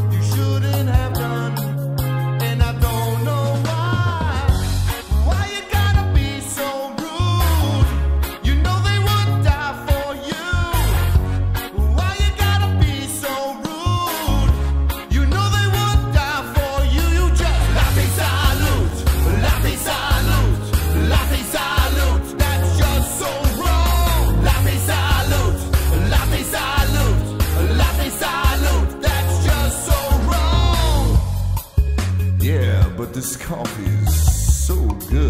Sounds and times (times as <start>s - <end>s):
Happy music: 0.0s - 35.2s.